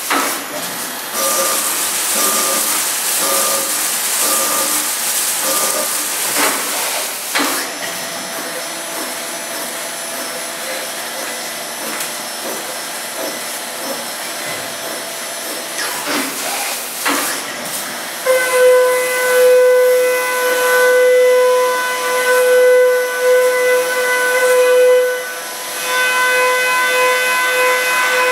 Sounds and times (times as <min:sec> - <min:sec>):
Drill: 0:00.0 - 0:28.3.